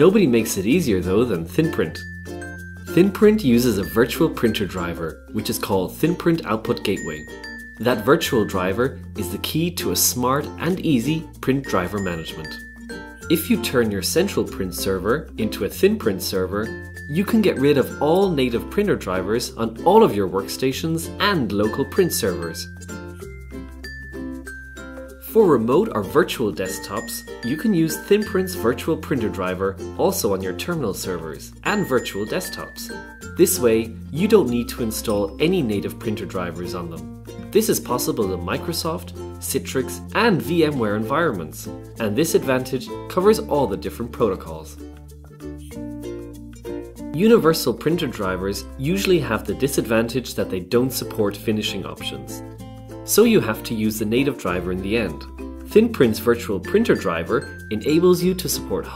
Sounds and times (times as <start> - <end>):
Speech: 0.0 - 2.1, 2.9 - 12.6, 13.3 - 22.8, 25.2 - 44.8, 47.1 - 52.4, 53.1 - 58.9
Music: 0.0 - 58.9.